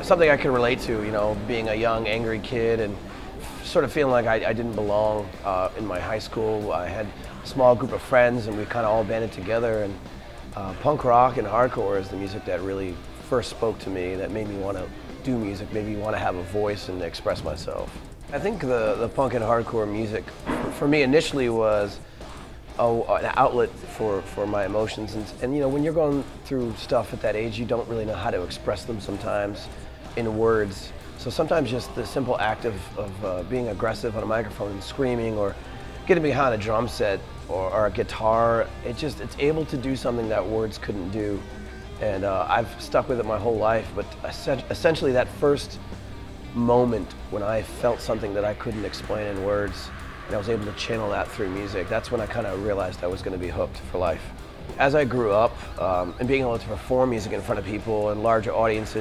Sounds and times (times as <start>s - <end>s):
Speech: 0.0s - 22.0s, 22.8s - 45.8s, 46.5s - 59.0s
Music: 0.0s - 59.0s.